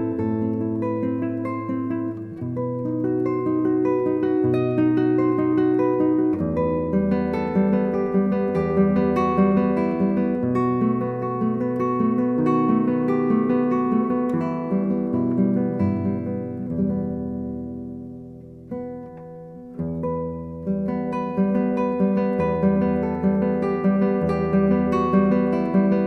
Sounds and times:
Acoustic guitar: 0.0 - 26.0.

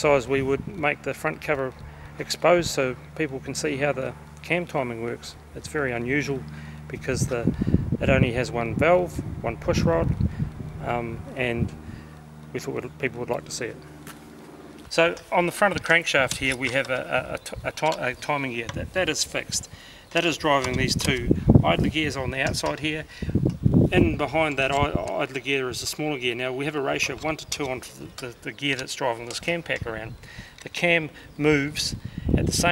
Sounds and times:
Speech: 0.0 - 10.2, 10.8 - 11.7, 12.5 - 13.8, 14.9 - 23.1, 23.9 - 32.7.

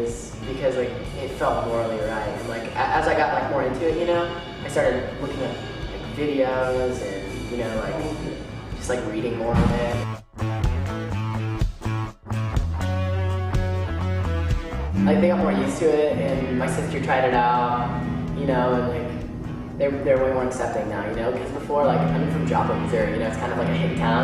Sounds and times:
Speech: 0.0 - 10.1, 15.0 - 24.2
Music: 0.0 - 24.2.

